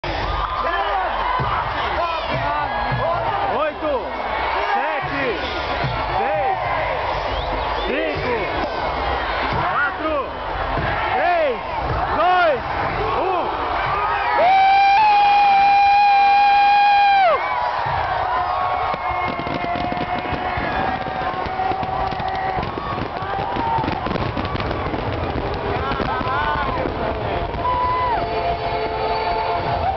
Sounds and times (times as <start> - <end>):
Cheering: 0.0 - 29.9
Crowd: 0.0 - 29.9.